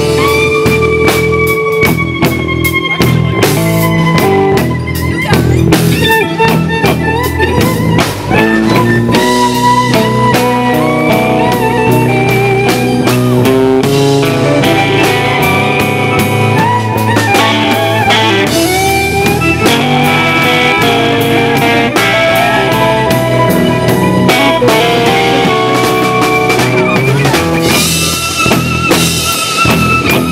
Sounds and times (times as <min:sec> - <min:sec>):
Blues: 0:00.0 - 0:30.3.